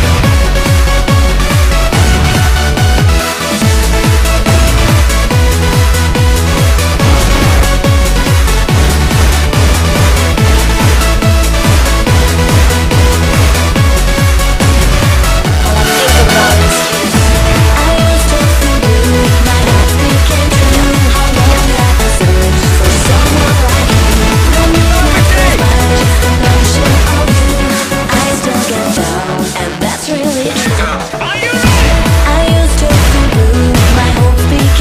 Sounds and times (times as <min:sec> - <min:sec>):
Techno: 0:00.0 - 0:34.8.